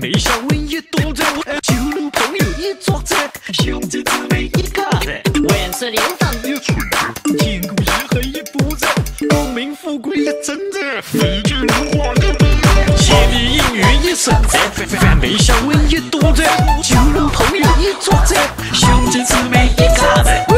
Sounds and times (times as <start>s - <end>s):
Music: 0.0s - 20.5s.